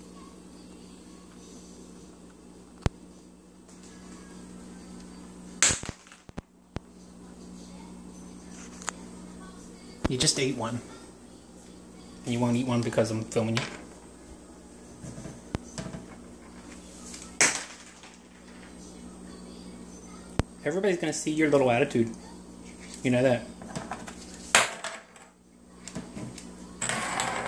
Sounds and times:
Music: 0.0s - 5.6s, 6.8s - 17.4s, 18.4s - 20.9s
Inside, small room: 0.0s - 27.4s
Speech: 7.1s - 11.4s, 12.0s - 13.6s, 18.8s - 23.5s.

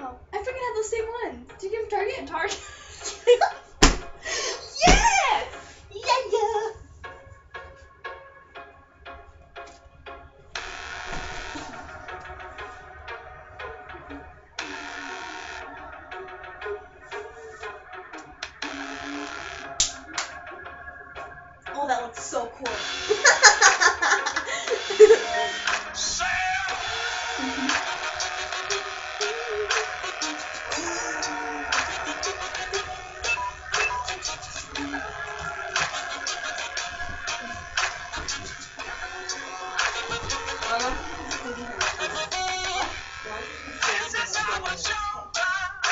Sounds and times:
Music: 0.0s - 45.9s.

